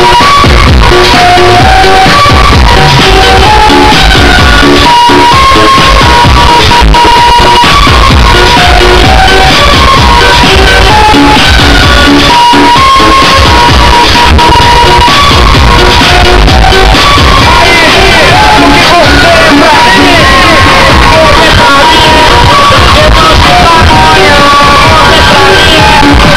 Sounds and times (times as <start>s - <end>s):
Music: 0.0s - 26.3s.